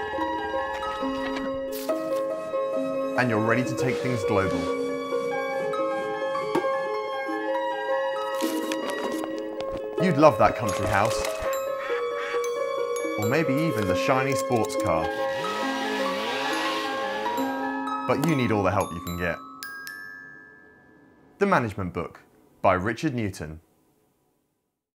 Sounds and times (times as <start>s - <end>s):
Music: 0.0s - 21.4s
Speech: 3.2s - 4.7s, 10.0s - 11.3s, 18.1s - 19.4s, 21.4s - 23.6s.